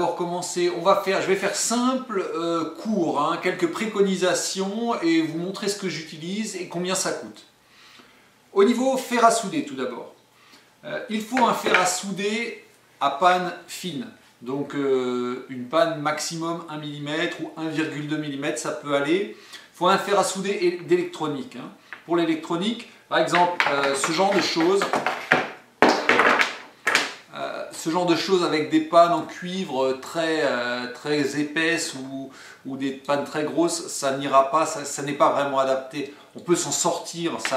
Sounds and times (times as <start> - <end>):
Speech: 0.0 - 7.5, 8.5 - 10.2, 10.8 - 25.1, 27.3 - 37.5.